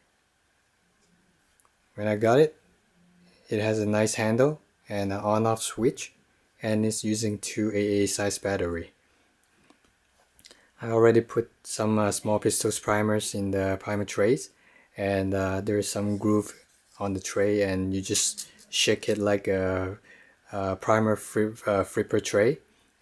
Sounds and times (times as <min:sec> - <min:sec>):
Speech: 0:02.0 - 0:02.6, 0:03.5 - 0:09.0, 0:10.8 - 0:22.7.